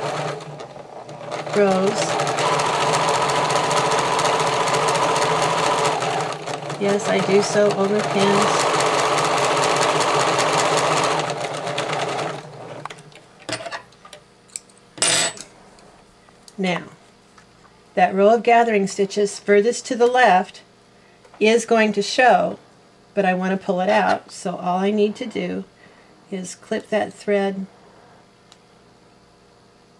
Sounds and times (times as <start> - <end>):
Sewing machine: 0.0 - 13.0
Speech: 1.6 - 2.2, 6.8 - 8.6, 16.6 - 17.0, 18.0 - 20.7, 21.4 - 22.6, 23.2 - 25.7, 26.3 - 27.7.